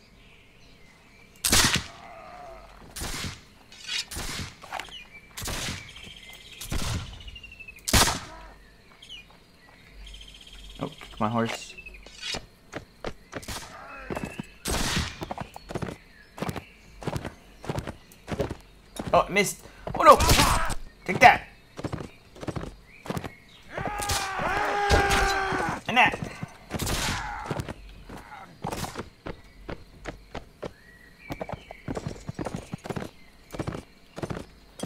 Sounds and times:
Gunshot, gunfire: 1.5s - 1.9s, 7.9s - 8.3s, 14.7s - 15.2s, 26.8s - 27.2s.

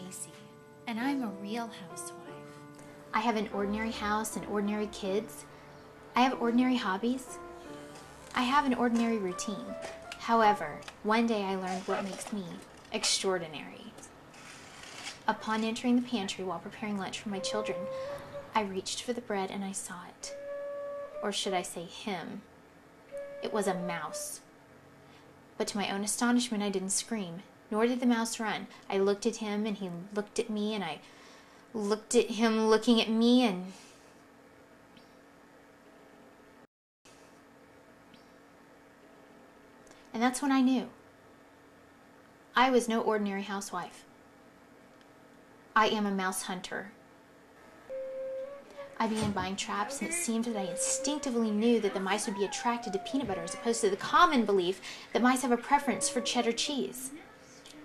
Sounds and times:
Speech: 0.0s - 2.2s, 3.2s - 5.4s, 6.2s - 7.4s, 8.4s - 14.1s, 15.3s - 17.9s, 18.6s - 20.3s, 21.2s - 22.4s, 23.4s - 24.4s, 25.6s - 31.0s, 31.8s - 33.8s, 40.1s - 41.0s, 42.6s - 44.0s, 45.8s - 47.0s, 49.0s - 57.8s
Music: 0.0s - 12.3s, 15.3s - 22.4s, 23.1s - 24.5s, 47.9s - 57.8s.

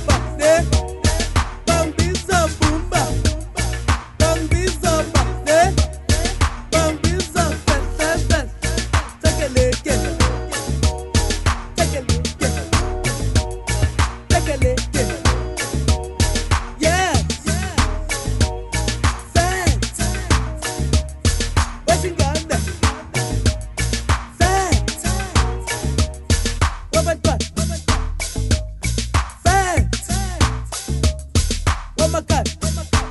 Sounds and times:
Afrobeat: 0.0s - 33.1s.

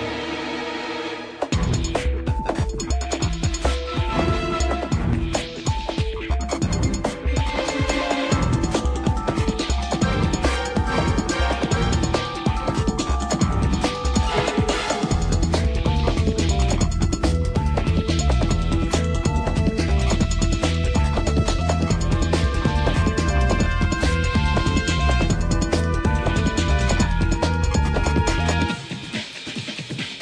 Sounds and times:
Music: 0.0s - 30.2s.

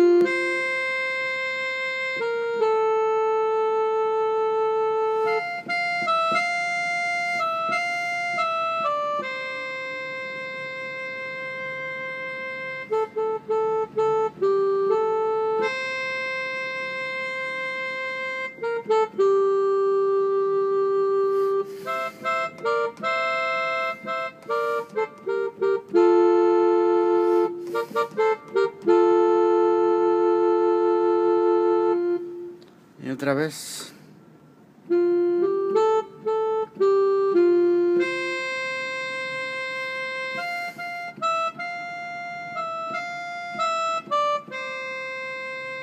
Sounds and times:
Piano: 0.0s - 32.8s, 34.8s - 45.8s.

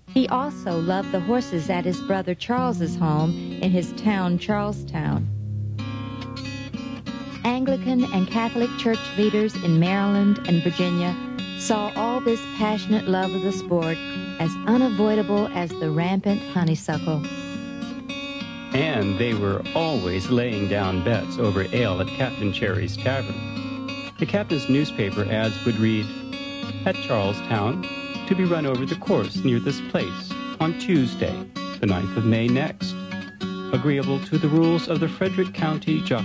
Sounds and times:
Music: 0.0s - 36.2s
Speech: 0.2s - 5.3s, 7.4s - 17.4s, 18.8s - 23.4s, 24.2s - 26.1s, 26.9s - 33.0s, 33.8s - 36.2s.

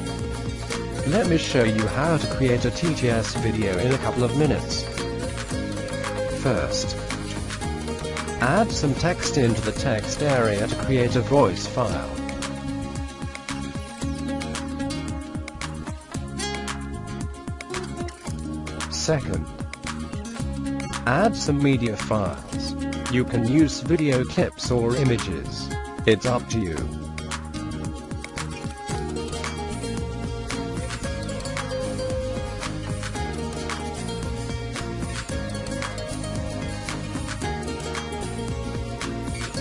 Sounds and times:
Music: 0.0s - 39.6s
Male speech, man speaking: 1.0s - 4.9s, 6.4s - 7.0s, 8.4s - 12.2s, 18.9s - 19.5s, 21.0s - 27.0s.

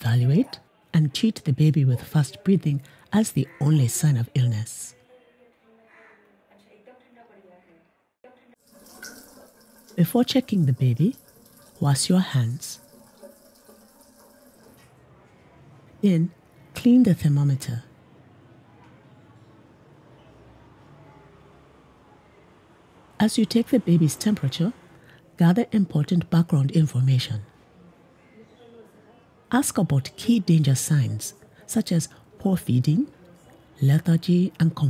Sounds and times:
Speech: 0.0s - 8.6s, 10.0s - 11.2s, 11.8s - 12.8s, 16.0s - 18.0s, 23.2s - 24.8s, 25.4s - 27.5s, 28.3s - 34.9s.

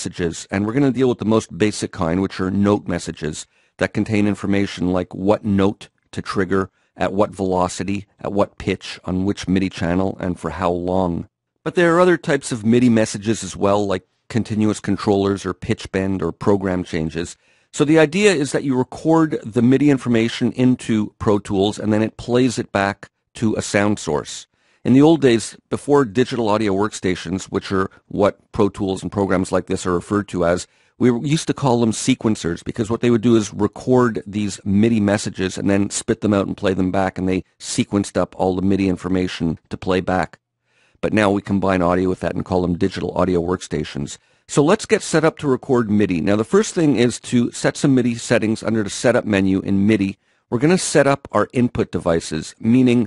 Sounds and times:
Speech: 0.0s - 40.4s, 41.0s - 53.0s.

